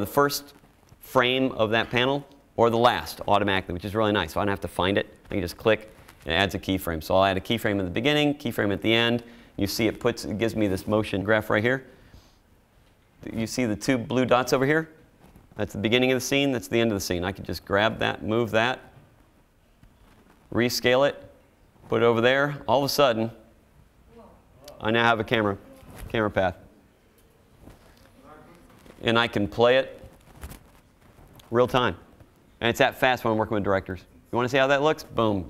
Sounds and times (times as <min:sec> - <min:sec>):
Speech: 0:00.0 - 0:11.9, 0:13.2 - 0:15.0, 0:15.6 - 0:18.9, 0:20.5 - 0:21.3, 0:21.9 - 0:23.4, 0:24.1 - 0:26.7, 0:28.1 - 0:30.0, 0:31.5 - 0:32.0, 0:32.6 - 0:35.4.